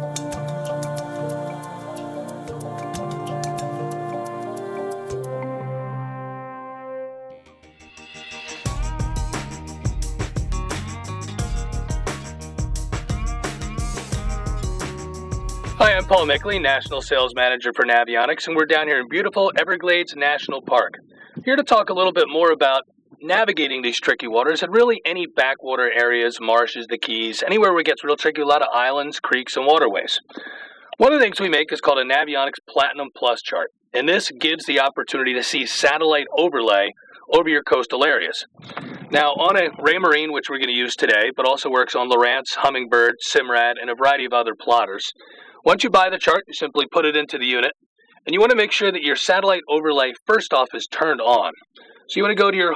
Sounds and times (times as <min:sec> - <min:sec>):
Speech: 0:15.8 - 0:30.3, 0:31.0 - 0:52.7.